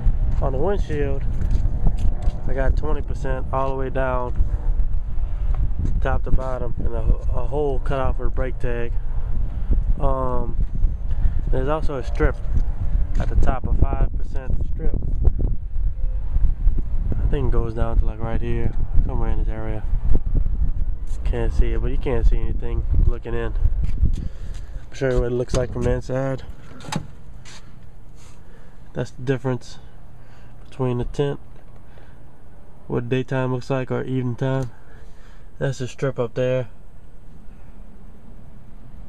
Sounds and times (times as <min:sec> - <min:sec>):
Speech: 0:00.4 - 0:01.3, 0:02.5 - 0:04.4, 0:06.0 - 0:09.0, 0:10.0 - 0:10.6, 0:11.5 - 0:12.4, 0:13.2 - 0:15.0, 0:17.2 - 0:19.9, 0:21.1 - 0:23.6, 0:24.9 - 0:26.5, 0:29.0 - 0:29.9, 0:30.7 - 0:31.4, 0:32.9 - 0:34.8, 0:35.6 - 0:36.8.